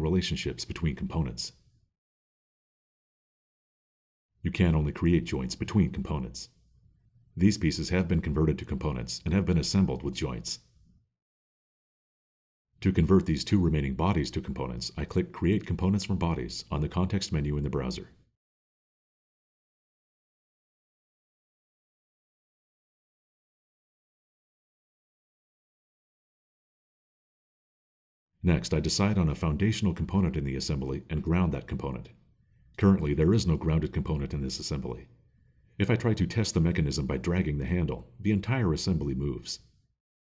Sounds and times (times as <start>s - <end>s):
Speech: 0.0s - 1.6s, 4.5s - 6.6s, 7.4s - 10.7s, 12.8s - 18.2s, 28.4s - 32.2s, 32.8s - 35.1s, 35.8s - 39.7s.